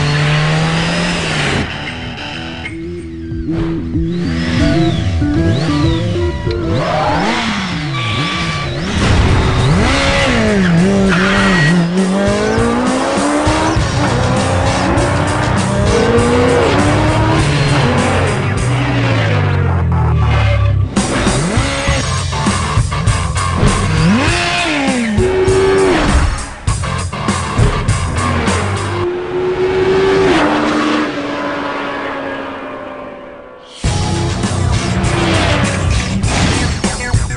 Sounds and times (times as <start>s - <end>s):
Motorcycle: 0.0s - 36.8s
Music: 1.8s - 29.0s, 33.7s - 37.3s.